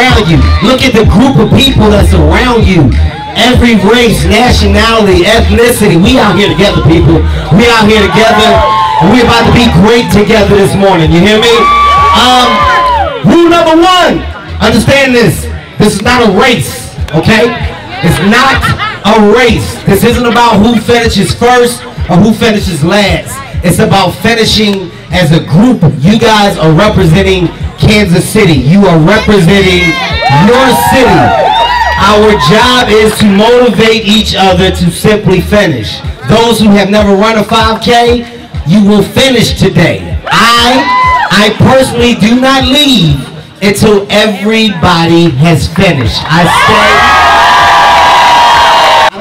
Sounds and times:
Speech: 0.0 - 31.4, 32.0 - 47.0
Crowd: 0.0 - 49.2
Outside, urban or manmade: 0.0 - 49.2.

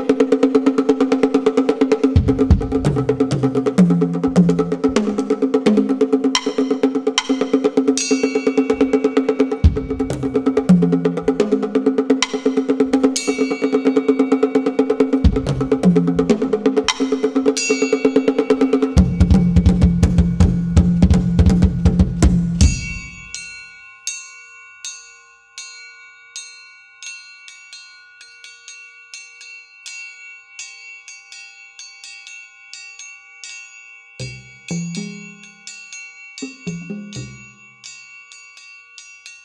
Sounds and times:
Drum: 0.0 - 23.4, 34.2 - 35.5, 36.4 - 37.6
Drum kit: 0.0 - 23.4, 34.2 - 35.4, 36.4 - 37.4
Wood block: 0.0 - 23.8, 34.2 - 38.7.

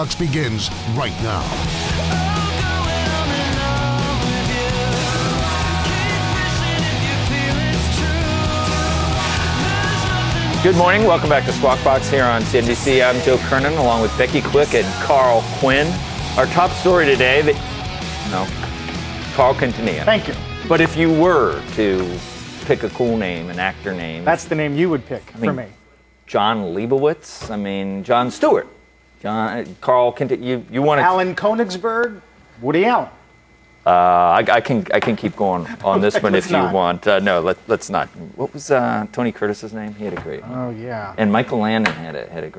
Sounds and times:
Speech: 0.0 - 1.6, 33.9 - 42.5.

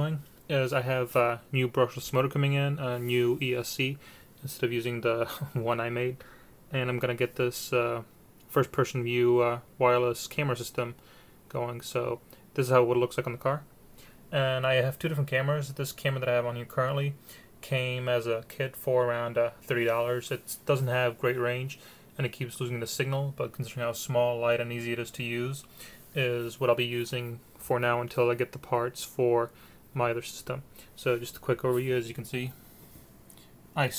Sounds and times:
Speech: 0.0 - 13.7, 14.3 - 32.6, 33.8 - 33.9.

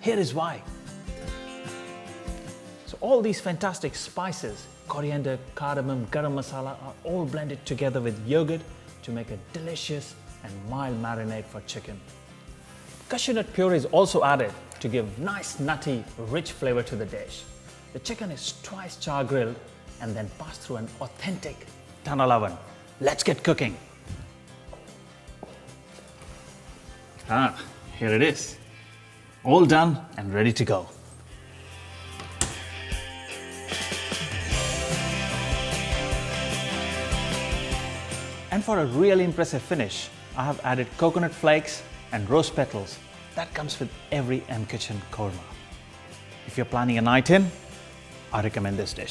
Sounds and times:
Speech: 0.0 - 0.7, 2.9 - 12.0, 13.1 - 23.8, 27.2 - 28.6, 29.4 - 31.0, 38.5 - 45.5, 46.5 - 47.6, 48.3 - 49.1
Music: 0.0 - 49.1.

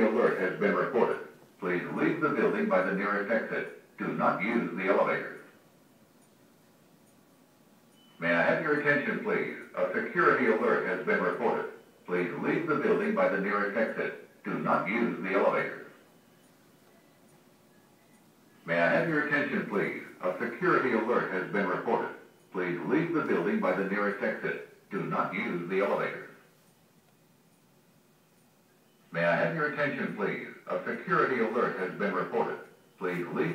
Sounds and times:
Speech: 0.0 - 5.6, 8.2 - 16.0, 18.6 - 26.5, 29.1 - 33.5.

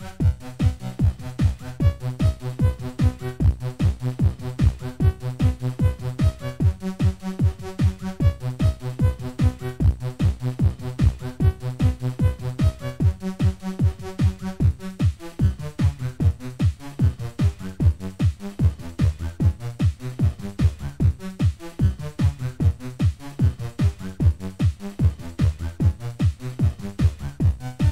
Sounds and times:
Disco: 0.0 - 27.9.

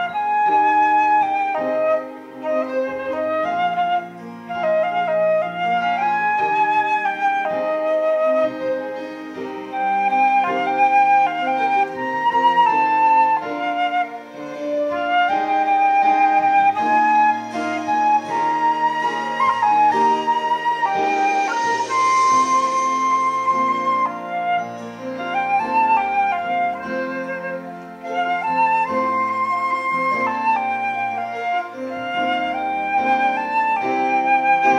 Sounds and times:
Flute: 0.0 - 34.7.

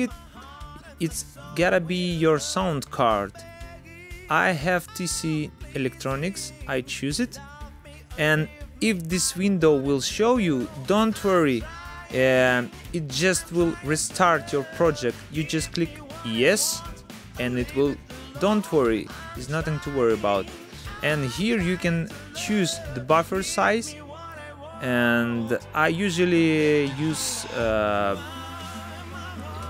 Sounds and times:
Music: 0.0 - 29.7
Speech: 1.0 - 3.4, 4.3 - 7.4, 8.1 - 24.0, 24.8 - 28.2.

